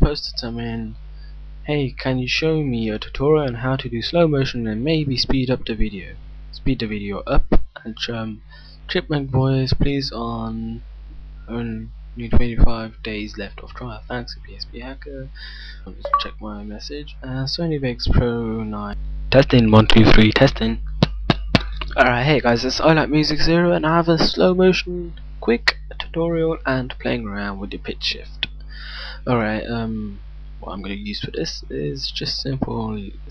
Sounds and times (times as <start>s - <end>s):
Speech: 0.0s - 1.0s, 1.7s - 10.8s, 11.5s - 33.3s.